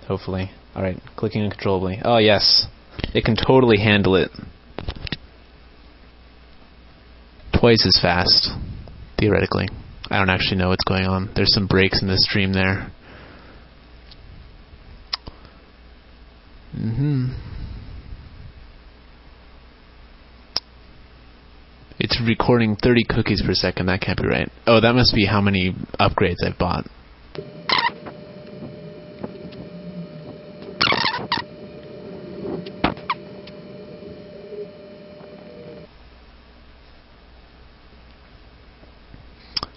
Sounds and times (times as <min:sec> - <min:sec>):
Speech: 0:00.0 - 0:04.5, 0:07.5 - 0:08.6, 0:09.2 - 0:13.0, 0:22.0 - 0:26.9.